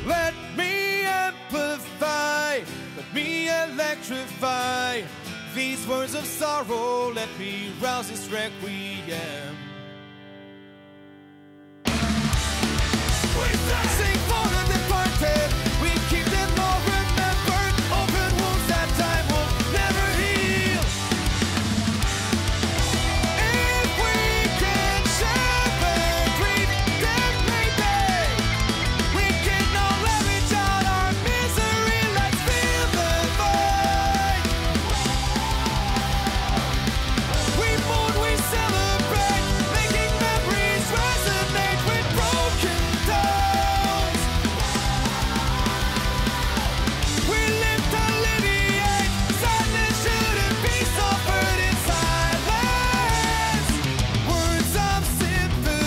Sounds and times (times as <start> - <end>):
Music: 0.0 - 55.8.